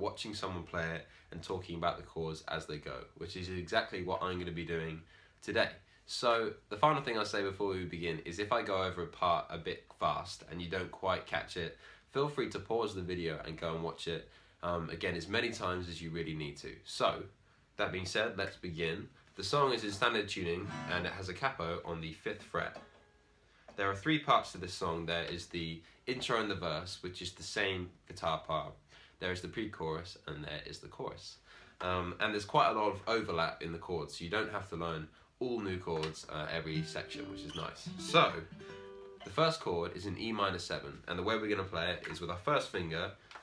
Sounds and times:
Speech: 0.0 - 22.8, 23.7 - 38.6, 39.2 - 43.4
Guitar: 19.4 - 23.8, 35.9 - 41.1.

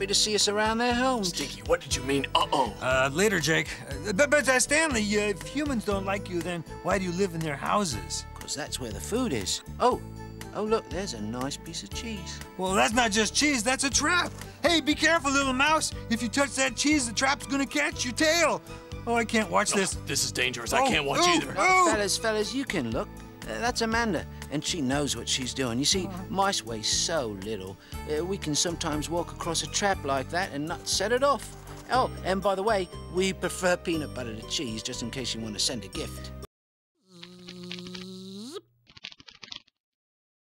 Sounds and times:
Music: 0.0 - 36.5.

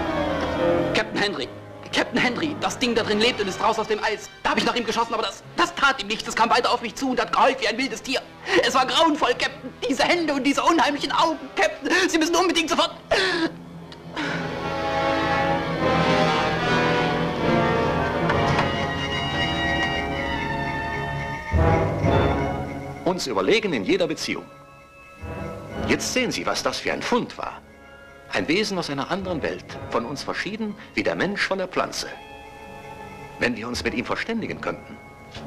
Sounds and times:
Music: 0.0 - 35.4
Speech: 1.0 - 13.0, 23.1 - 24.5, 25.9 - 27.6, 28.3 - 32.2, 33.4 - 34.9.

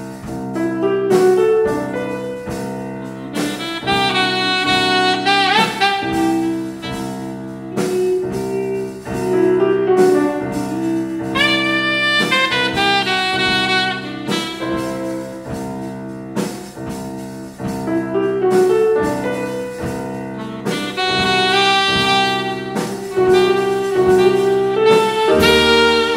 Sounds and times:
Saxophone: 0.8 - 15.8, 18.1 - 26.1.

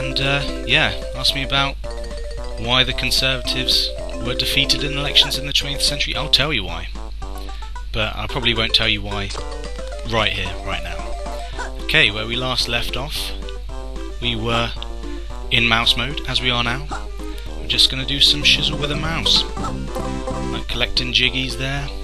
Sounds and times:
Speech: 0.0 - 1.8, 2.6 - 7.0, 8.0 - 9.4, 10.1 - 11.0, 11.9 - 13.4, 14.2 - 14.8, 15.5 - 16.9, 17.7 - 19.5, 20.6 - 22.0
Music: 0.0 - 22.0.

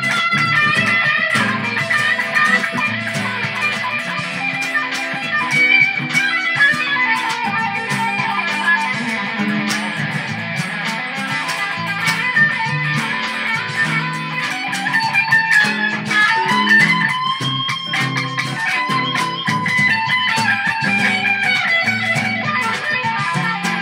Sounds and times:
Electric guitar: 0.0 - 23.8
Strum: 0.0 - 23.8.

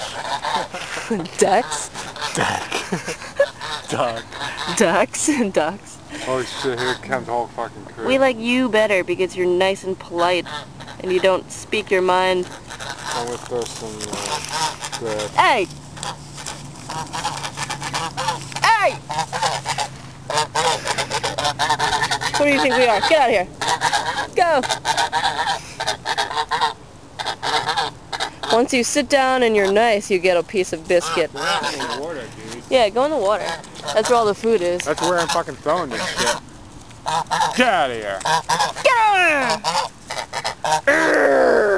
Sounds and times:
Honk: 0.0 - 5.0, 6.2 - 7.3, 10.2 - 11.4, 12.0 - 28.8, 30.9 - 32.5, 33.2 - 36.4, 37.0 - 37.6, 38.2 - 41.0.

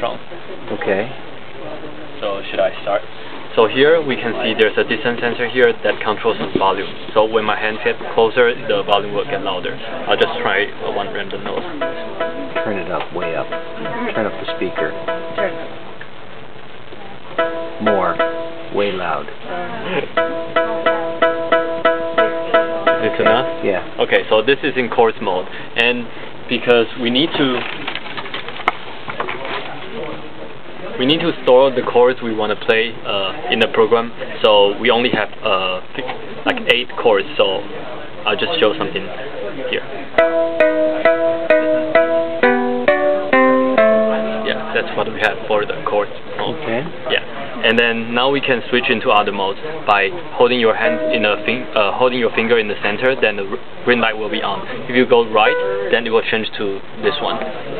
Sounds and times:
Speech: 0.0 - 12.0, 12.6 - 15.6, 17.8 - 20.1, 23.0 - 27.7, 29.3 - 40.1, 44.4 - 57.7.

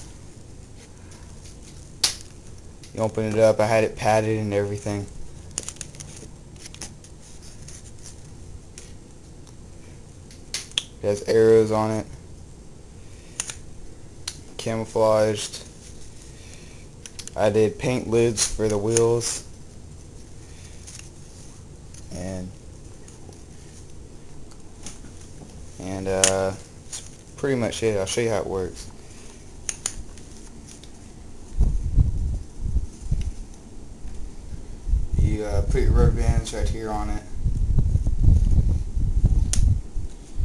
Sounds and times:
Speech: 3.0 - 5.1, 11.0 - 12.1, 14.6 - 15.7, 17.4 - 19.5, 22.1 - 22.6, 25.8 - 26.6, 27.4 - 28.9, 35.2 - 37.4.

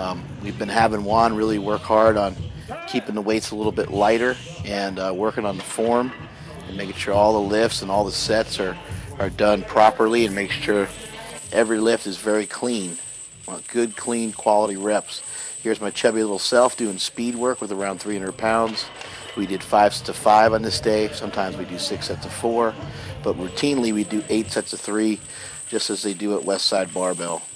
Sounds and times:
Speech: 0.0 - 27.4.

